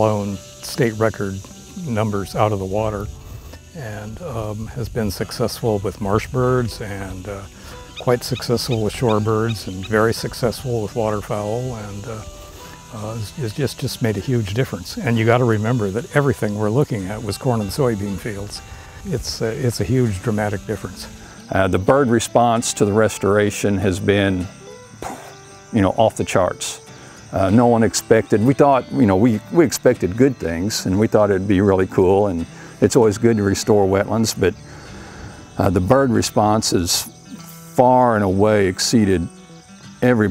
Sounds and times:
Speech: 0.0 - 3.1, 3.8 - 12.3, 13.0 - 24.5, 25.8 - 26.8, 27.4 - 34.6, 35.6 - 37.2, 37.8 - 39.3, 40.0 - 40.3
Music: 0.0 - 40.3.

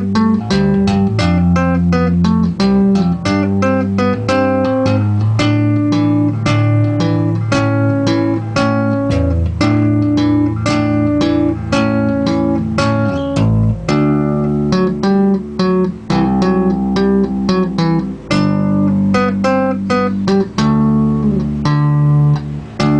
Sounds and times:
Electric guitar: 0.0 - 22.9.

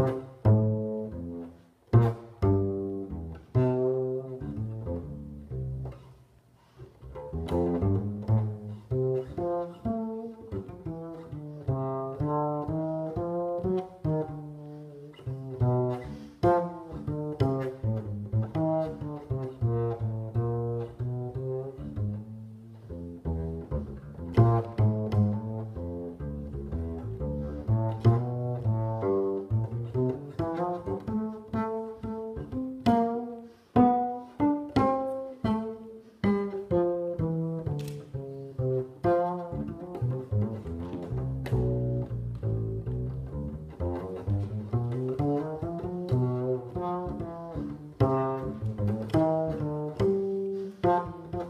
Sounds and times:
Cello: 0.0 - 51.5
Double bass: 0.0 - 51.5
Pizzicato: 0.0 - 51.5.

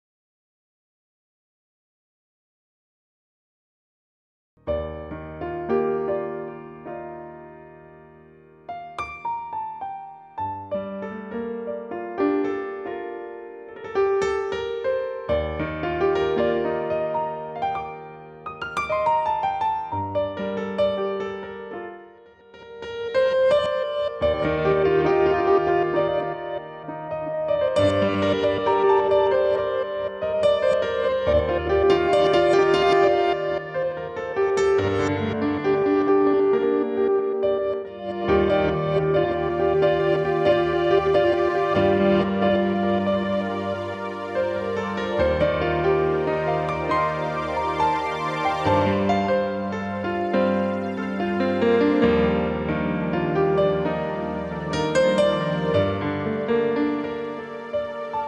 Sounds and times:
Music: 4.6 - 58.2.

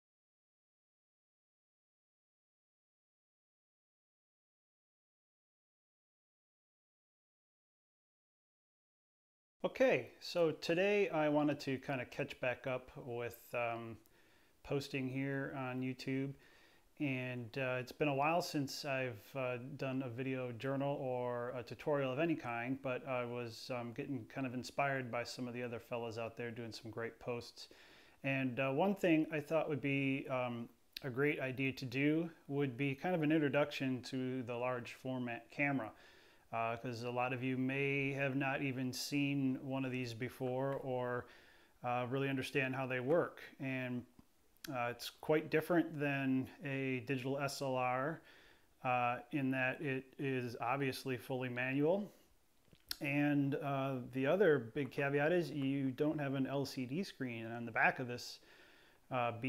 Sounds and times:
Speech: 9.6 - 16.4, 17.0 - 48.2, 48.8 - 52.2, 52.9 - 58.4, 59.1 - 59.4.

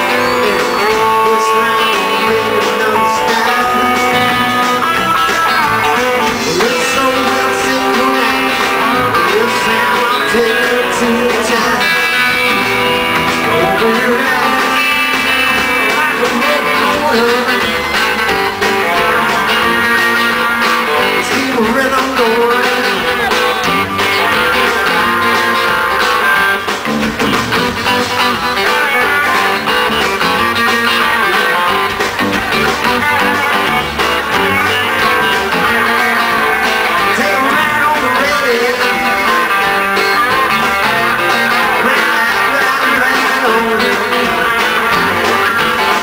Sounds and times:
Singing: 0.0 - 26.7, 40.3 - 46.0
Guitar: 0.0 - 46.0
Rock and roll: 0.0 - 46.0.

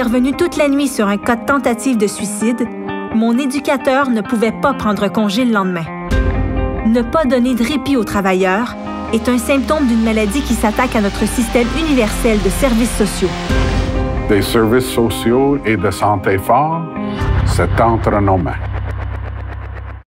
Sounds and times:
Music: 0.0 - 20.0
Speech: 14.3 - 18.6.

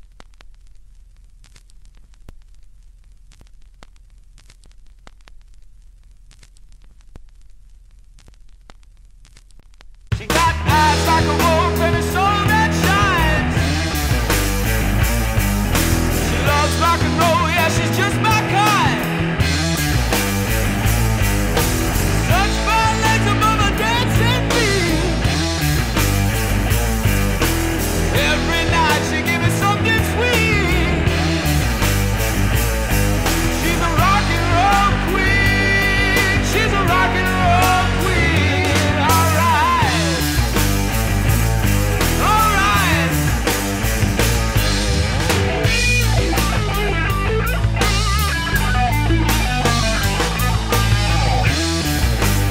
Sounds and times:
Grunge: 10.1 - 52.5
Punk rock: 10.1 - 52.5
Rock and roll: 10.1 - 52.5
Heavy metal: 10.2 - 52.5.

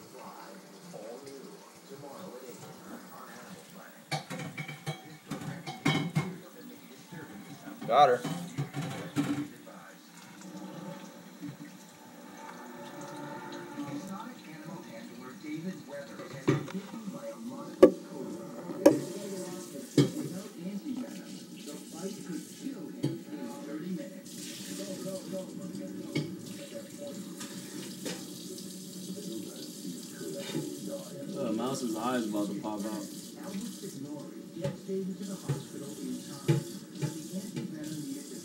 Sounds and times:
Speech: 0.0 - 4.2, 4.9 - 10.2, 13.8 - 28.0, 29.1 - 38.4.

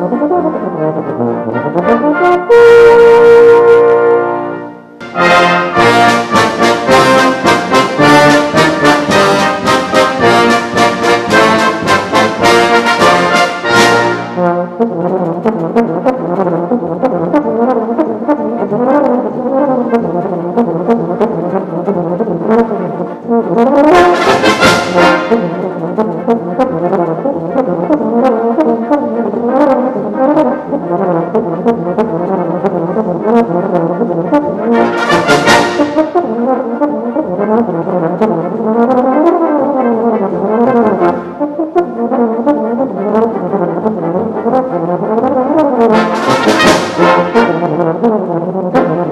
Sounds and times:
Music: 0.0 - 49.1.

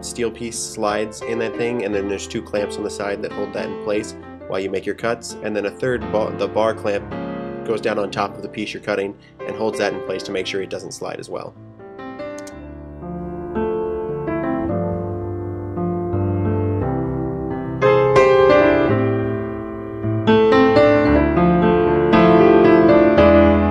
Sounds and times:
Speech: 0.0 - 7.1, 7.7 - 11.5
Music: 0.0 - 23.7.

